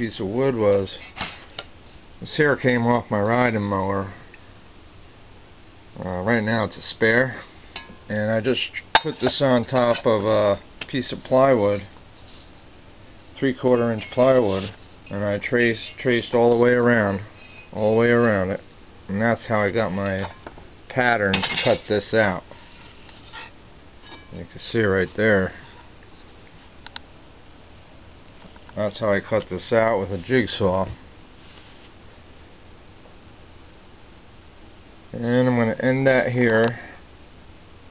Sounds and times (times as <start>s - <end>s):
Speech: 0.0s - 1.0s, 2.2s - 4.2s, 6.0s - 7.5s, 8.1s - 11.9s, 13.4s - 22.5s, 24.3s - 25.7s, 28.8s - 31.0s, 35.1s - 37.0s
Inside, small room: 0.0s - 37.9s.